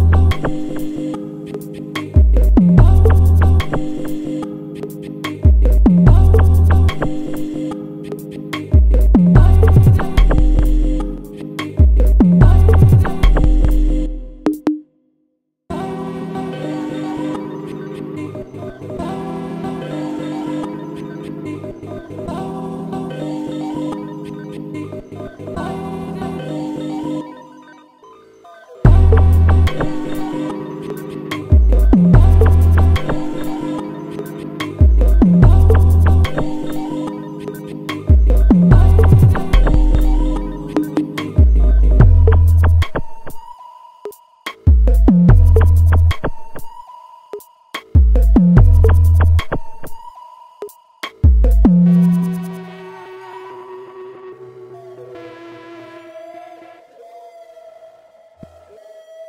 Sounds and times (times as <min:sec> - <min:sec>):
Drum machine: 0:02.2 - 0:04.1, 0:05.4 - 0:07.2, 0:08.8 - 0:14.8, 0:28.9 - 0:36.9, 0:37.6 - 0:43.4, 0:44.1 - 0:46.8, 0:47.4 - 0:52.6.